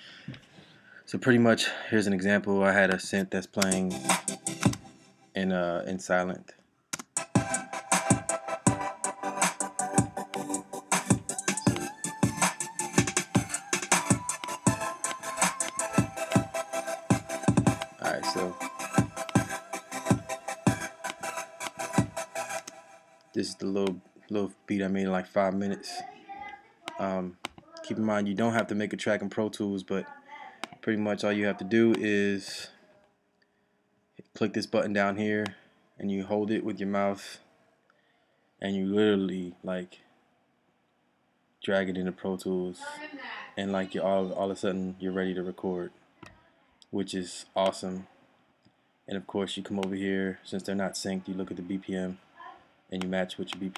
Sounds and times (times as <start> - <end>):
Speech: 1.1 - 4.0, 5.4 - 6.6, 18.0 - 18.6, 23.4 - 32.8, 34.2 - 37.4, 38.6 - 40.0, 41.6 - 48.1, 49.1 - 52.2, 53.0 - 53.7
Music: 3.6 - 5.2, 7.2 - 23.4.